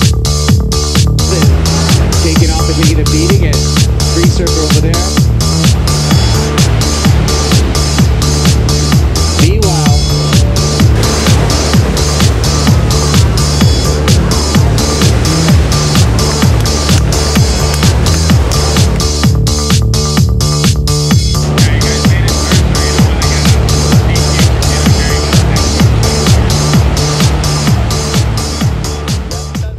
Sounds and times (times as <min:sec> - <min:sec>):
Trance music: 0:00.0 - 0:29.7
Waves, surf: 0:00.0 - 0:29.7.